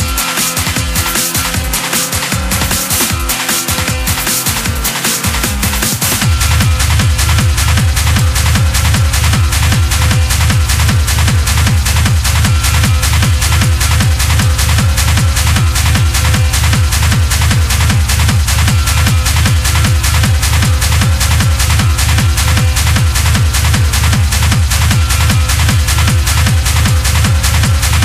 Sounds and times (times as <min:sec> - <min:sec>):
Techno: 0:00.0 - 0:28.0.